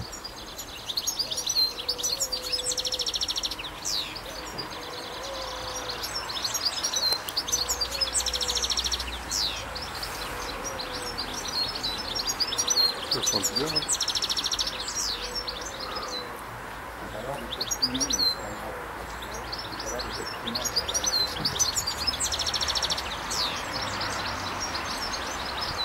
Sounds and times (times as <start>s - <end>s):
Speech: 13.1s - 13.9s, 17.0s - 21.7s.